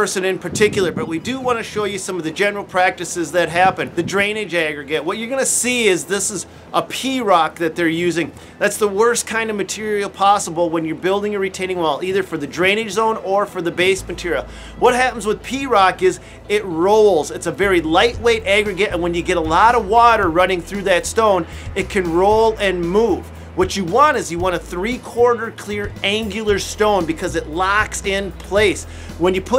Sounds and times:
Music: 0.0 - 29.5
Speech: 0.0 - 29.5.

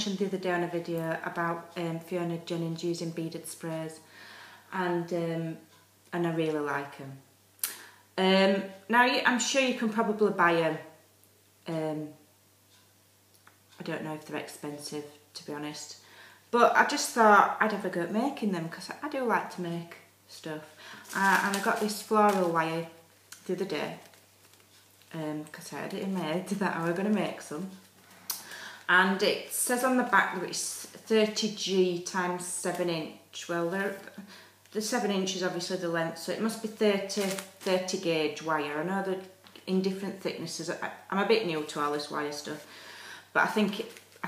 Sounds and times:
Speech: 0.0 - 4.1, 4.7 - 7.3, 8.2 - 10.9, 11.6 - 12.2, 13.8 - 16.0, 16.6 - 24.1, 25.1 - 27.8, 28.9 - 42.7, 43.3 - 44.2.

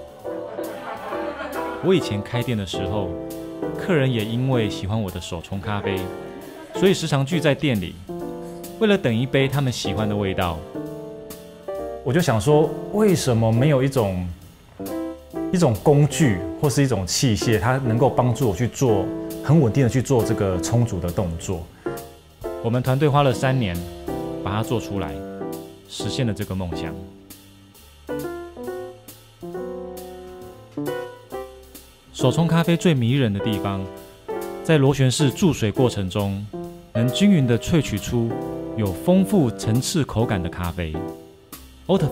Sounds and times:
Music: 0.0 - 42.1
Speech: 0.6 - 3.2, 3.8 - 8.0, 8.8 - 10.7, 12.0 - 14.4, 15.5 - 21.7, 22.6 - 25.2, 25.9 - 27.1, 32.1 - 33.9, 34.7 - 41.0, 41.9 - 42.1.

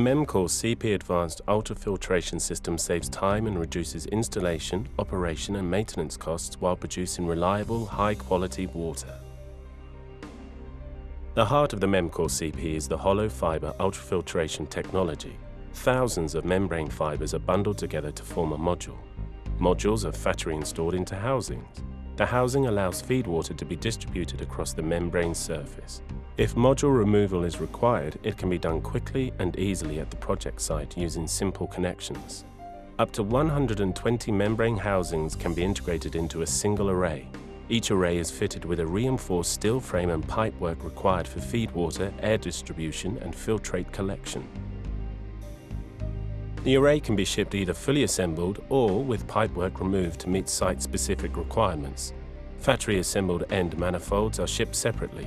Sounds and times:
Speech: 0.0 - 9.2, 11.4 - 19.0, 19.6 - 44.5, 46.6 - 55.2
Music: 0.0 - 55.2.

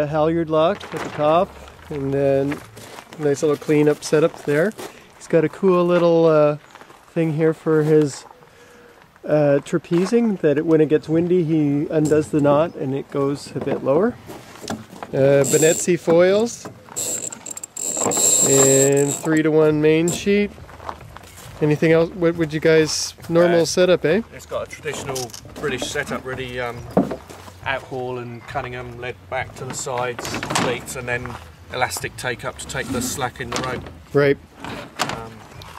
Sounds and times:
Speech: 3.2 - 6.6, 7.2 - 8.3, 9.3 - 14.2, 21.6 - 26.8, 27.7 - 34.4, 35.0 - 35.5.

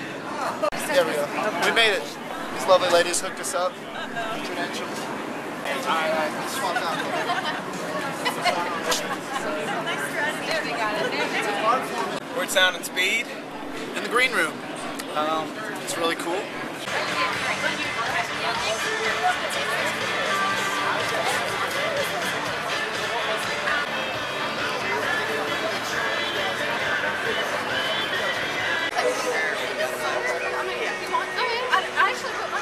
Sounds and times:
Music: 16.9 - 32.6.

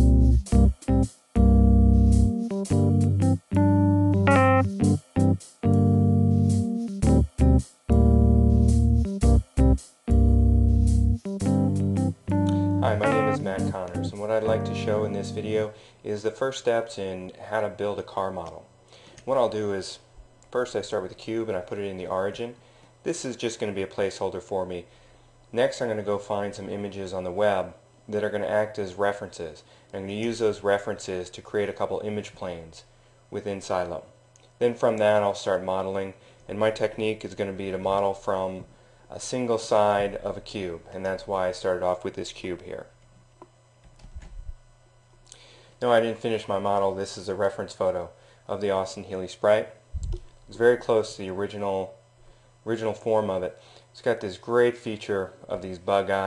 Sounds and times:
Music: 0.0 - 15.7
Speech: 12.8 - 24.9, 25.5 - 43.0, 45.8 - 49.8, 50.5 - 52.0, 52.6 - 56.2.

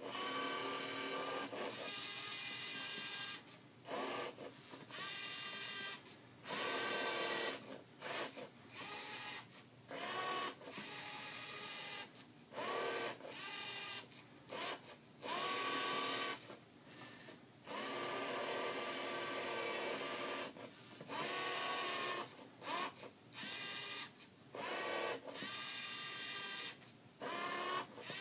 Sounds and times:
Printer: 0.0 - 16.6, 17.7 - 28.2.

